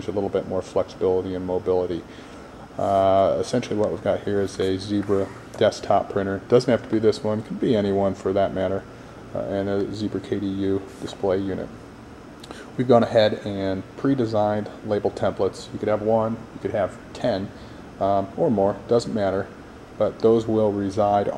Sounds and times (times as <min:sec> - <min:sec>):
Speech: 0:00.0 - 0:02.1, 0:02.8 - 0:11.8, 0:12.8 - 0:21.3.